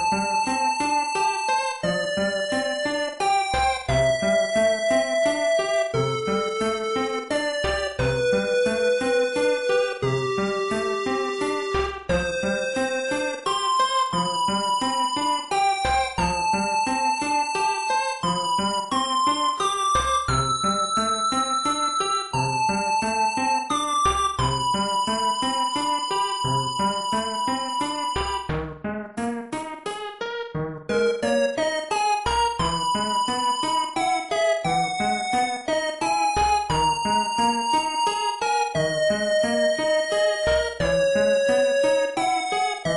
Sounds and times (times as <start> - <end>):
Music: 0.0 - 42.9.